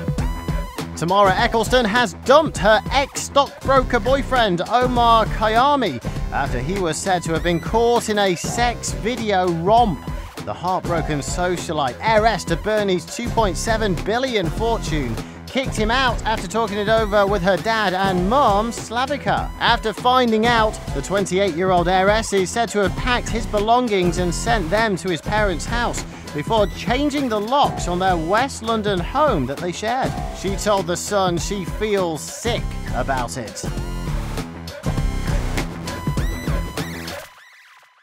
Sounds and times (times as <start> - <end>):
Music: 0.0 - 38.0
Speech: 1.0 - 33.7.